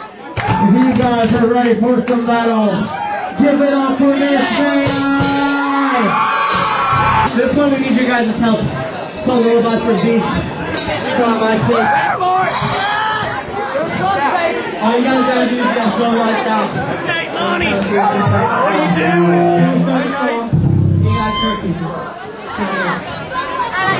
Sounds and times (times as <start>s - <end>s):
Chatter: 0.0s - 23.9s
Speech: 0.3s - 6.2s, 7.3s - 12.6s, 13.5s - 23.9s
Music: 6.5s - 7.3s, 20.5s - 21.6s.